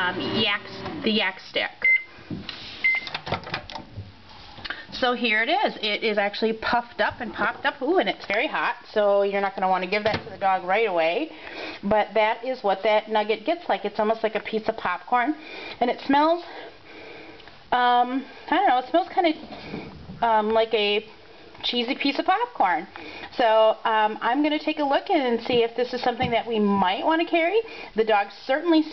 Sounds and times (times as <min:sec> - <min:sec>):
Speech: 0:00.0 - 0:01.8, 0:05.0 - 0:11.3, 0:11.9 - 0:16.5, 0:17.7 - 0:19.4, 0:20.2 - 0:28.9.